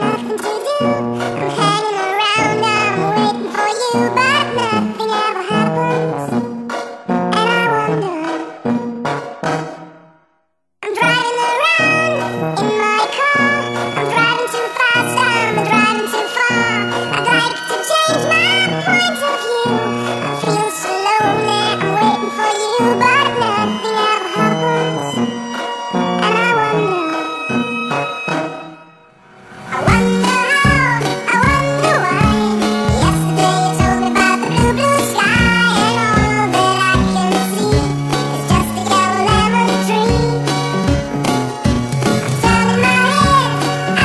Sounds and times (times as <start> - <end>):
Music: 0.0 - 44.0.